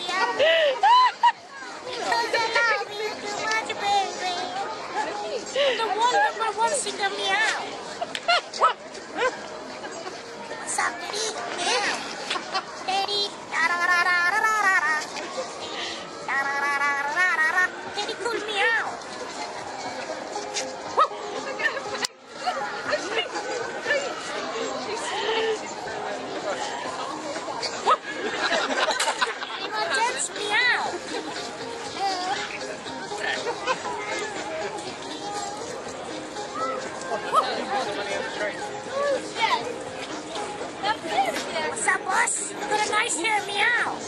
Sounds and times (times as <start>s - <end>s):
Music: 0.0s - 44.0s.